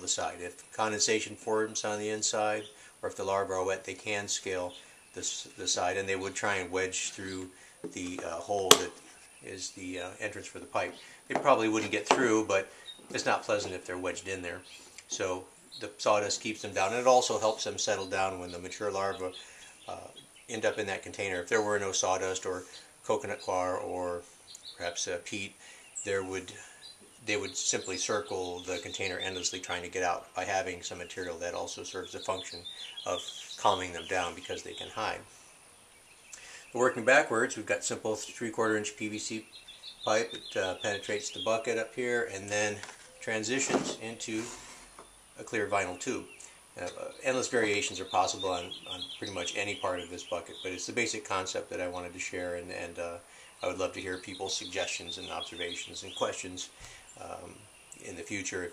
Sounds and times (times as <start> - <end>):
Speech: 0.0 - 24.2, 24.8 - 26.6, 27.2 - 35.3, 36.7 - 39.4, 40.1 - 44.6, 45.4 - 58.7.